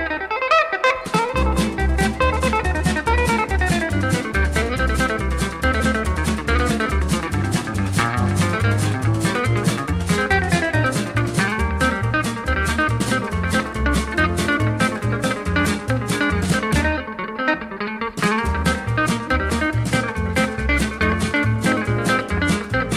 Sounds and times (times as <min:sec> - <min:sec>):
Guitar: 0:00.0 - 0:22.9
Swing music: 0:00.0 - 0:22.9.